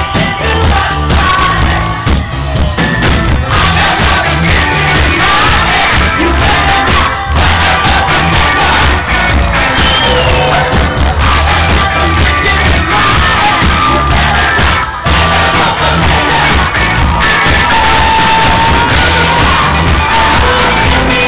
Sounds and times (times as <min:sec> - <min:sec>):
Music: 0:00.0 - 0:21.2.